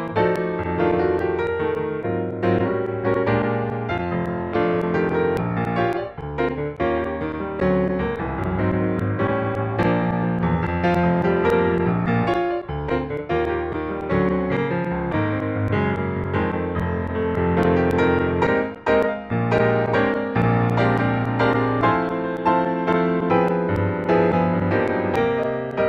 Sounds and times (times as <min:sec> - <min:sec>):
Electric piano: 0:00.0 - 0:25.8.